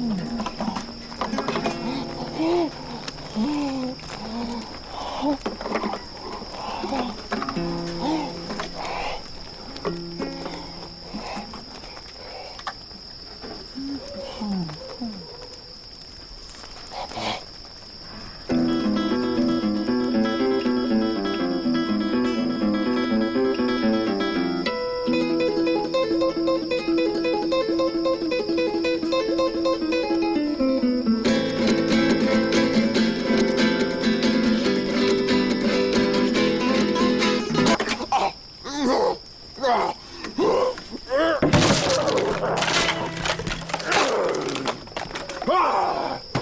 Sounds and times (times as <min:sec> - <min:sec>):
Strum: 0:00.0 - 0:04.6, 0:07.1 - 0:11.5, 0:18.5 - 0:37.9, 0:41.4 - 0:44.8.